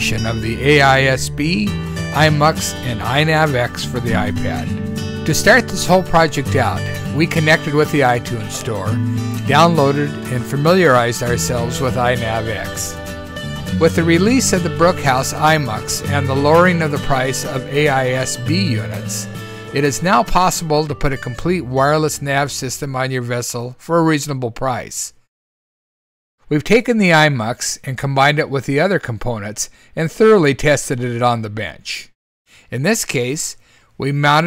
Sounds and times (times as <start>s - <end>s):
Speech: 0.0s - 4.7s, 5.3s - 12.9s, 13.8s - 25.2s, 26.5s - 32.1s, 32.7s - 34.4s
Music: 0.0s - 23.1s.